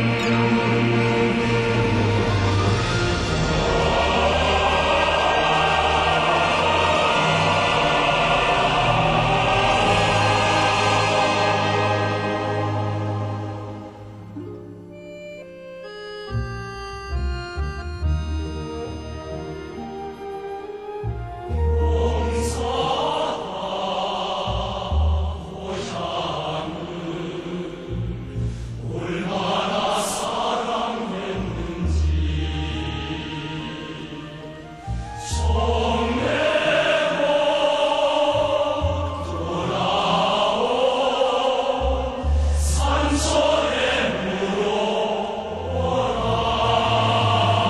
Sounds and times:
Soul music: 0:00.0 - 0:47.7.

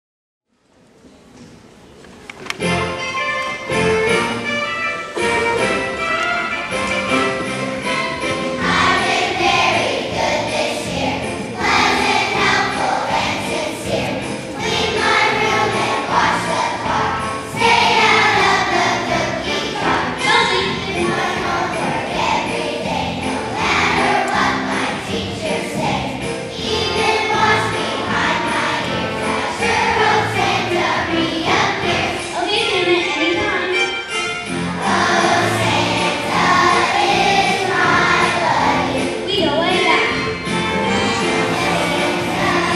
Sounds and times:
Choir: 0:08.6 - 0:20.2, 0:20.8 - 0:32.3, 0:34.8 - 0:39.2, 0:41.0 - 0:42.7
Child singing: 0:11.6 - 0:26.0.

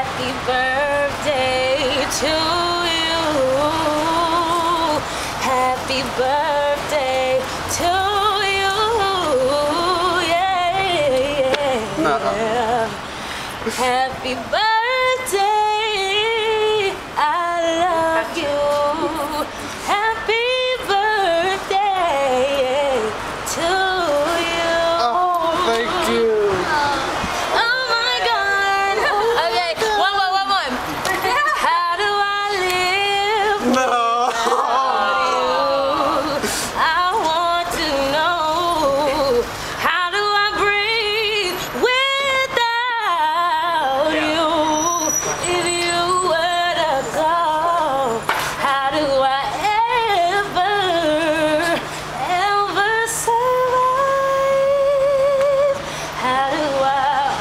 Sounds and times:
Female singing: 0:00.0 - 0:13.1, 0:13.7 - 0:57.4.

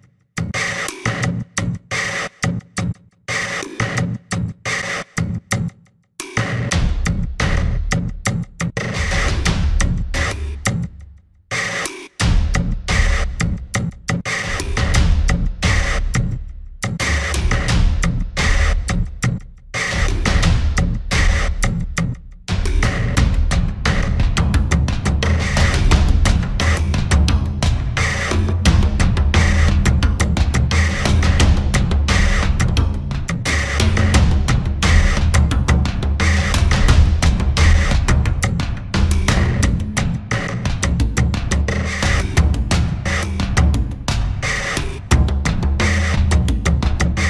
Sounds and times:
Music: 0:00.0 - 0:47.2.

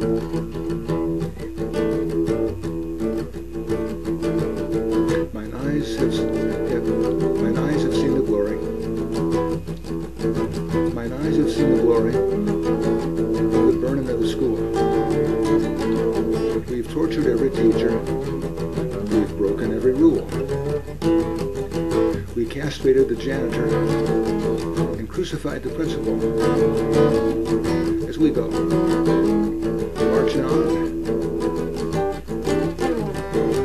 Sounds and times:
Acoustic guitar: 0:00.0 - 0:33.6
Strum: 0:00.0 - 0:33.6
Speech: 0:05.1 - 0:08.8, 0:10.9 - 0:12.4, 0:13.4 - 0:14.8, 0:16.5 - 0:18.3, 0:19.0 - 0:20.4, 0:22.1 - 0:24.3, 0:24.9 - 0:26.3, 0:27.8 - 0:28.8, 0:30.0 - 0:30.9.

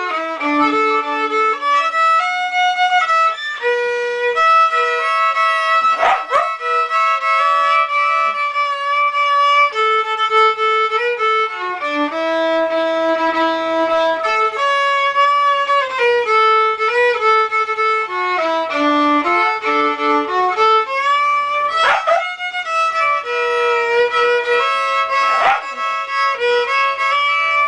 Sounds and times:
Violin, fiddle: 0:00.0 - 0:27.6.

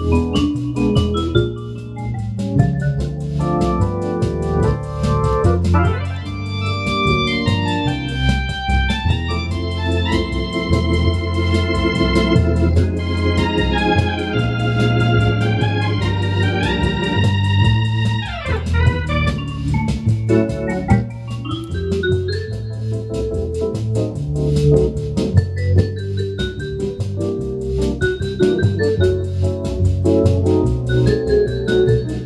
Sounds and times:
Hammond organ: 0:00.0 - 0:32.2.

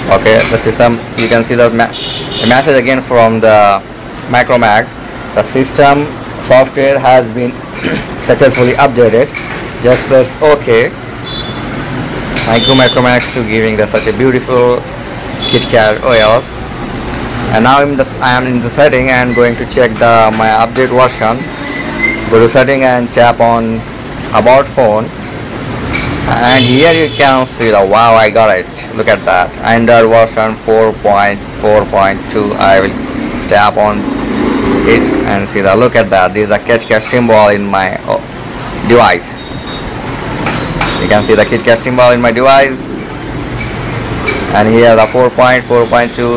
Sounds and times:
Speech: 0:00.0 - 0:11.0, 0:12.4 - 0:14.8, 0:15.5 - 0:16.6, 0:17.5 - 0:21.4, 0:22.3 - 0:25.1, 0:26.3 - 0:34.0, 0:34.9 - 0:39.4, 0:41.0 - 0:42.8, 0:44.5 - 0:46.3
Outside, urban or manmade: 0:00.0 - 0:46.3.

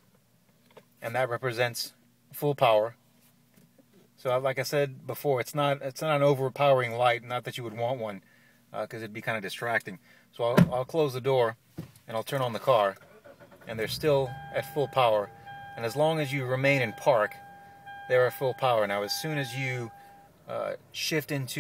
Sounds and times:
Speech: 0:01.0 - 0:03.0, 0:04.2 - 0:08.2, 0:08.8 - 0:13.0, 0:13.7 - 0:17.4, 0:18.1 - 0:19.9, 0:20.5 - 0:21.6.

